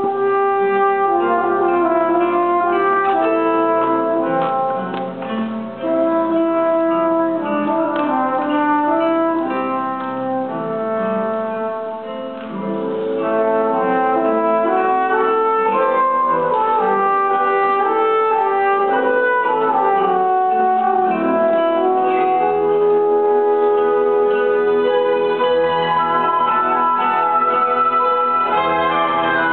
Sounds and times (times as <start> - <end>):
Acoustic guitar: 0.0 - 29.5
Strum: 0.0 - 29.5.